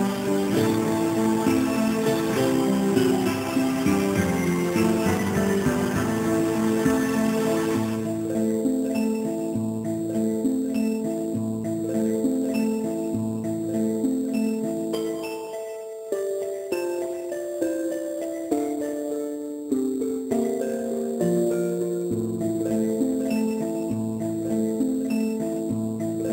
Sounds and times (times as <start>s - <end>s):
Glockenspiel: 0.0s - 26.3s
Marimba, xylophone: 0.0s - 26.3s.